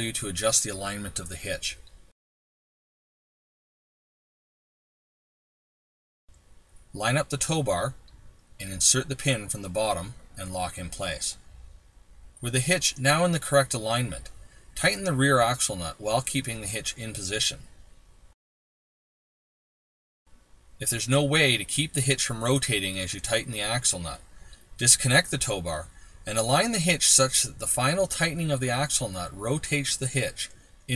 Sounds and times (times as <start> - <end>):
Speech: 0.0 - 1.9, 7.0 - 8.0, 8.6 - 11.4, 12.4 - 17.7, 20.8 - 24.2, 24.8 - 30.9.